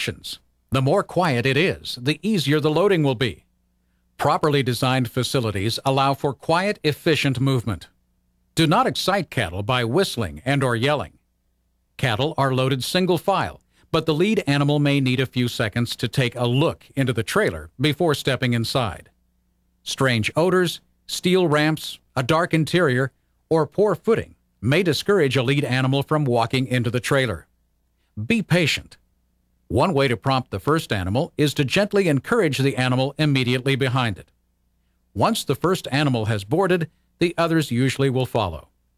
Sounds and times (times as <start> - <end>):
Speech: 0.0 - 3.5, 4.2 - 8.0, 8.6 - 11.2, 12.0 - 19.1, 19.8 - 27.5, 28.2 - 29.0, 29.7 - 34.3, 35.2 - 38.7.